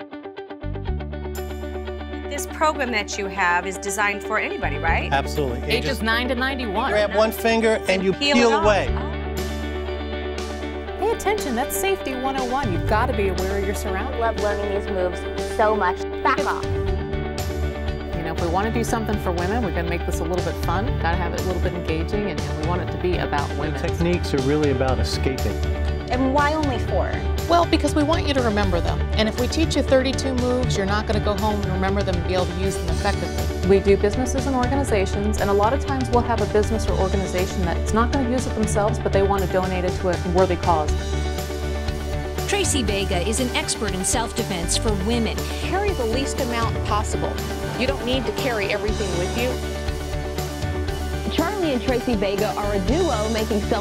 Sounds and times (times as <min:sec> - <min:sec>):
Music: 0:00.0 - 0:53.8
Speech: 0:02.3 - 0:09.1, 0:11.0 - 0:16.6, 0:18.2 - 0:40.9, 0:42.5 - 0:49.6, 0:51.3 - 0:53.8.